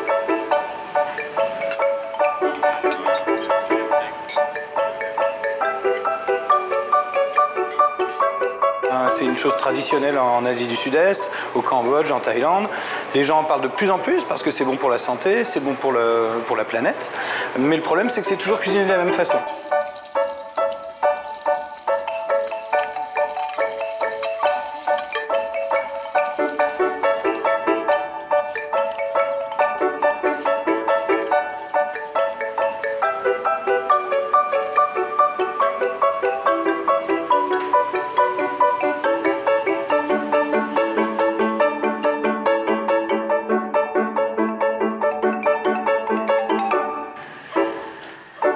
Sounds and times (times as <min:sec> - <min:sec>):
Music: 0:00.0 - 0:48.5.